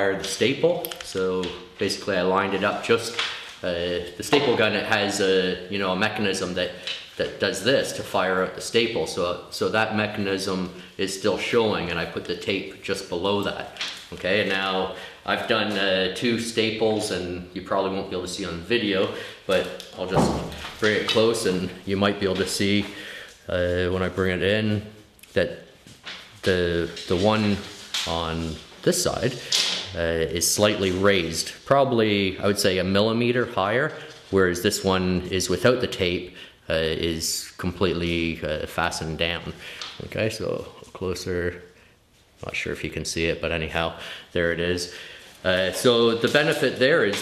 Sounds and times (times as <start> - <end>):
Speech: 0.0 - 25.7, 26.4 - 41.7, 42.4 - 47.2.